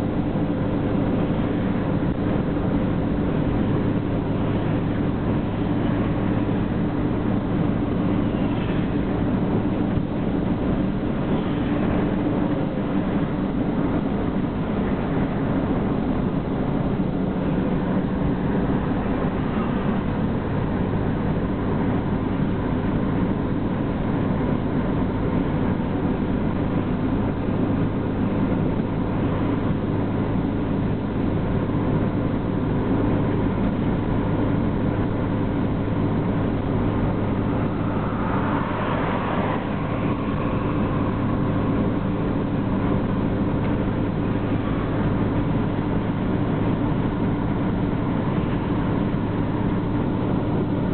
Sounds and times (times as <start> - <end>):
Truck: 0.0 - 50.9.